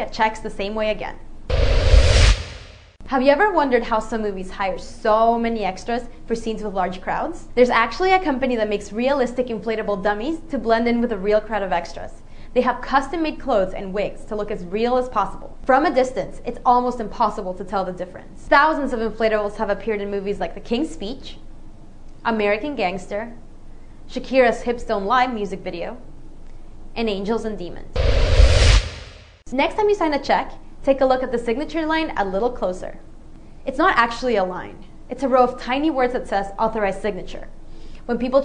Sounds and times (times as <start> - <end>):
Speech: 0.0 - 1.2, 3.1 - 21.4, 22.2 - 23.4, 24.1 - 26.1, 27.0 - 28.0, 29.5 - 33.1, 33.7 - 38.4.